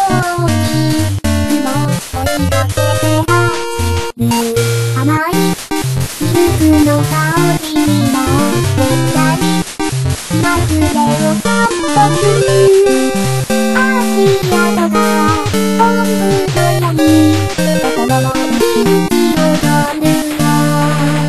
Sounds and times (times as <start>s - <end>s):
Music: 0.0s - 21.2s.